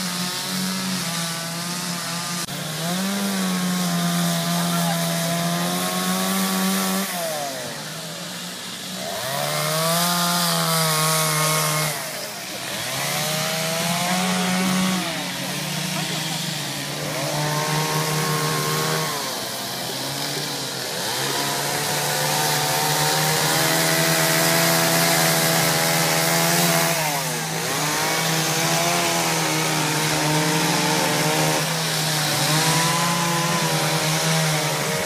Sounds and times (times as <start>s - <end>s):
Chainsaw: 0.0s - 35.0s.